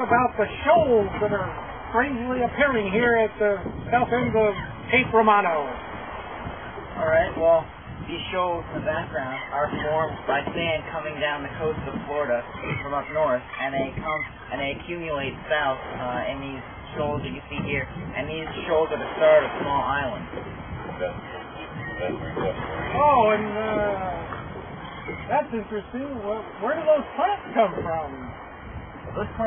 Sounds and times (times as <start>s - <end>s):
Speech: 0.0s - 5.8s, 7.0s - 20.3s, 21.9s - 24.3s, 25.3s - 28.4s, 29.1s - 29.4s
Outside, rural or natural: 0.0s - 29.4s.